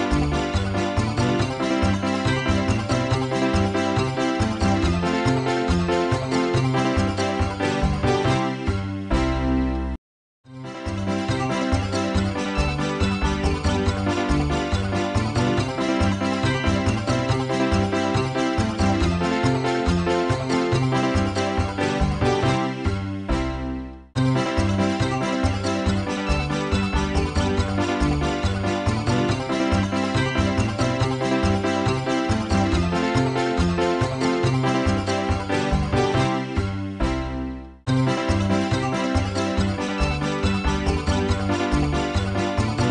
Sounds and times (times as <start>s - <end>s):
Music: 0.0s - 42.9s.